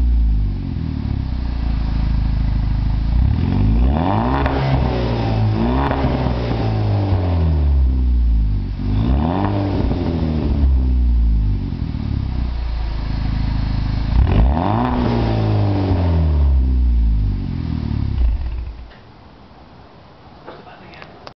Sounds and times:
Speech: 20.5s - 21.3s.

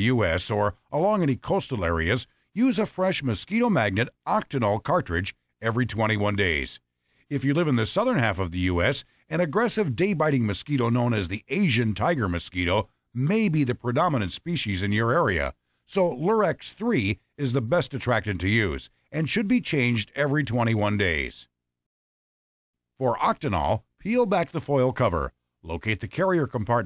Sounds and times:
Speech: 0.0s - 21.5s, 23.0s - 26.8s.

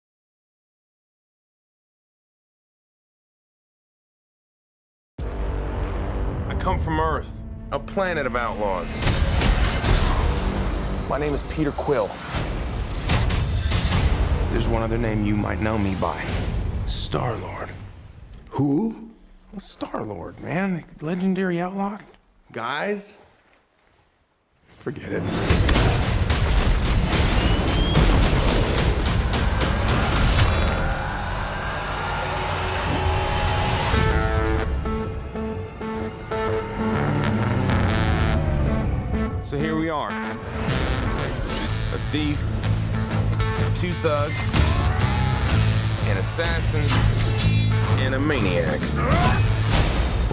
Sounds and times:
Speech: 6.5s - 9.0s, 18.5s - 23.2s, 24.8s - 25.3s, 39.5s - 40.2s, 41.9s - 42.5s, 43.7s - 44.4s, 46.0s - 49.4s.

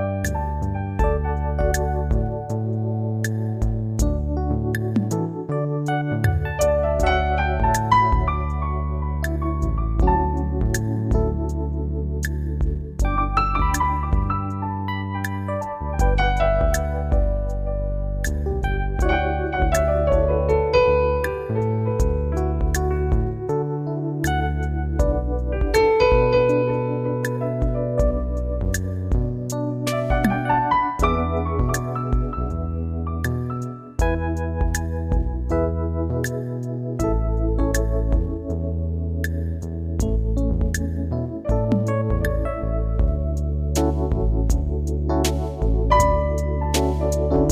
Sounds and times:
Music: 0.0s - 47.5s.

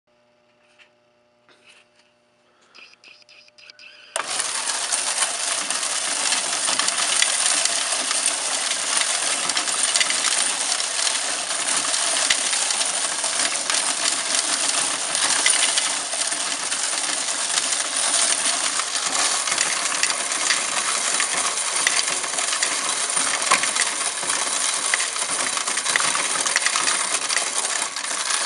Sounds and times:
Coin (dropping): 3.9s - 28.4s.

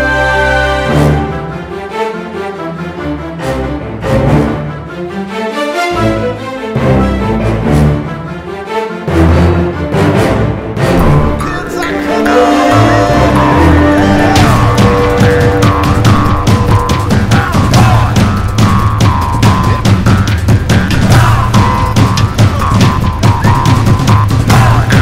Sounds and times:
Music: 0.0s - 25.0s.

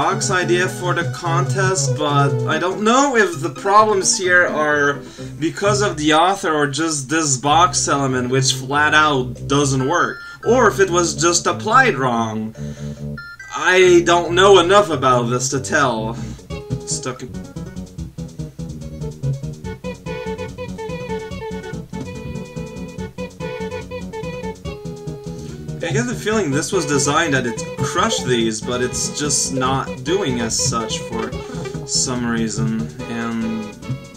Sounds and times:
Speech: 0.0s - 12.6s, 13.5s - 16.2s, 16.9s - 17.4s, 25.8s - 33.7s
Music: 0.0s - 34.1s.

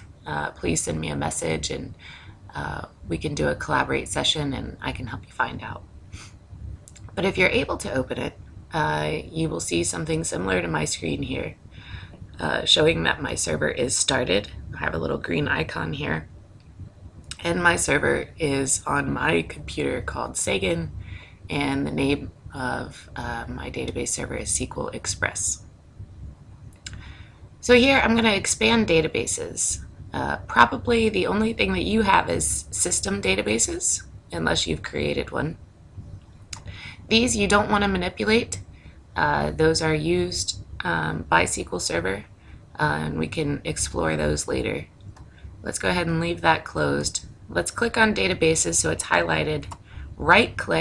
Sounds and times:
Speech: 0.3s - 5.8s, 6.9s - 16.3s, 17.3s - 25.6s, 26.9s - 35.6s, 36.6s - 38.6s, 39.2s - 44.8s, 45.6s - 50.8s.

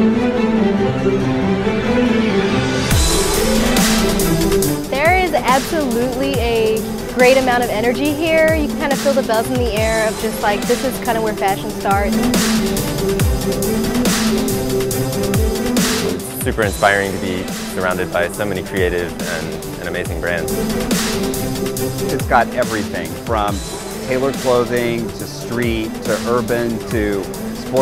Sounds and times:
Music: 0.0s - 27.8s
Speech: 5.0s - 12.2s, 16.2s - 20.5s, 22.1s - 27.8s.

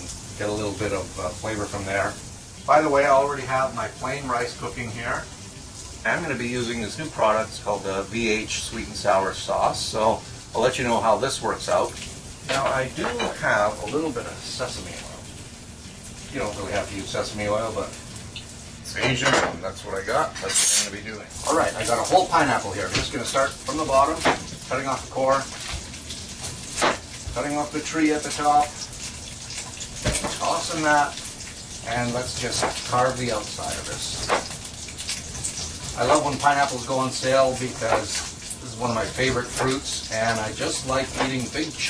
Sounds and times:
Speech: 0.0s - 5.3s, 6.1s - 15.3s, 16.3s - 18.0s, 18.9s - 25.5s, 27.4s - 28.7s, 30.3s - 31.2s, 31.8s - 34.3s, 36.0s - 41.8s
Water tap, faucet: 0.0s - 41.8s.

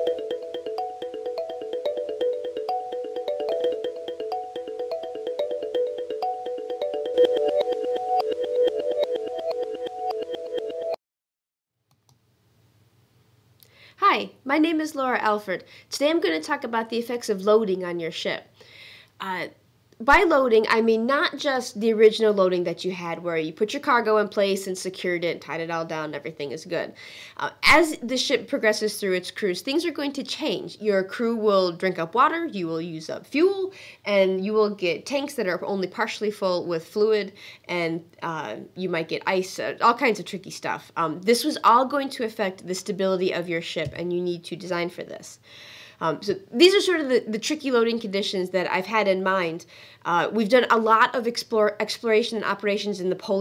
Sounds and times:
Speech: 14.0s - 18.5s, 19.2s - 45.4s, 46.0s - 53.4s.

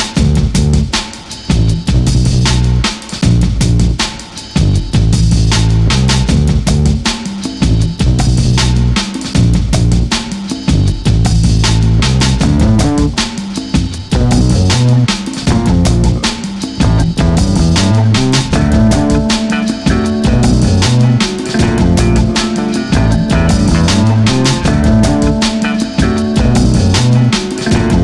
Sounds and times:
Music: 0.0s - 28.0s.

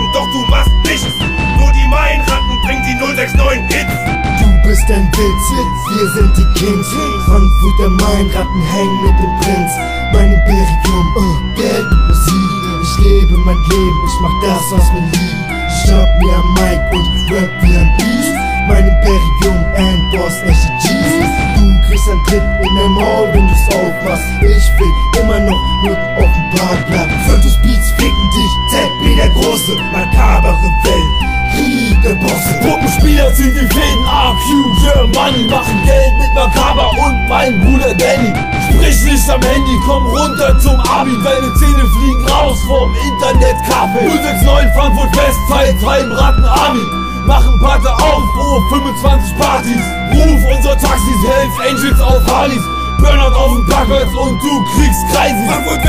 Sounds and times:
Music: 0.0s - 55.8s.

